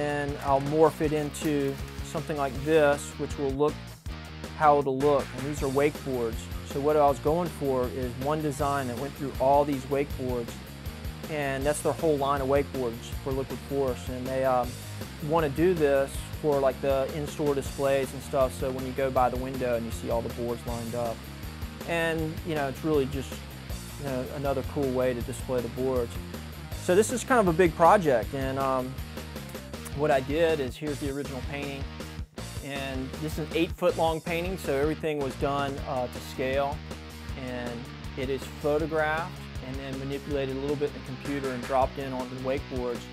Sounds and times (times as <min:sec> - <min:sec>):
Speech: 0:00.0 - 0:03.8, 0:04.6 - 0:10.6, 0:11.3 - 0:21.2, 0:21.9 - 0:23.4, 0:24.0 - 0:26.2, 0:26.8 - 0:29.0, 0:29.9 - 0:31.9, 0:32.6 - 0:36.8, 0:37.4 - 0:43.1
Music: 0:00.0 - 0:43.1.